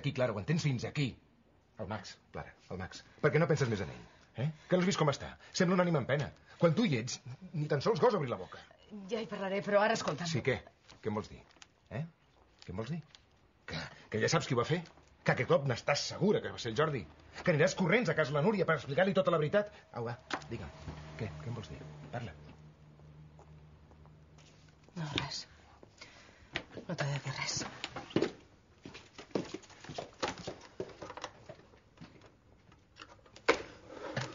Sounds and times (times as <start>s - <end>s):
Inside, small room: 0.0s - 34.3s.